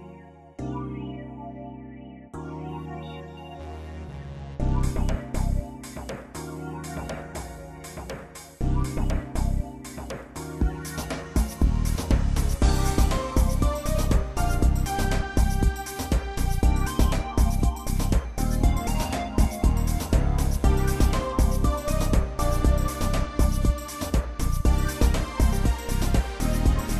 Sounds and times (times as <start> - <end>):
Music: 0.0 - 26.9.